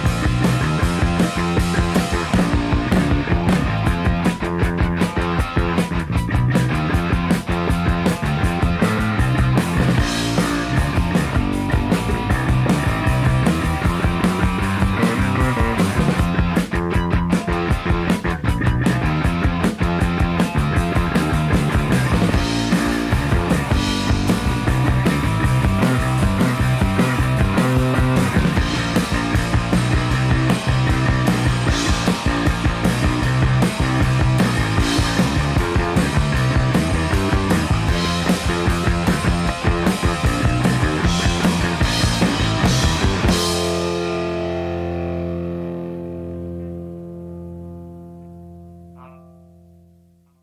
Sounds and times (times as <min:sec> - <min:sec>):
Punk rock: 0:00.0 - 0:46.5.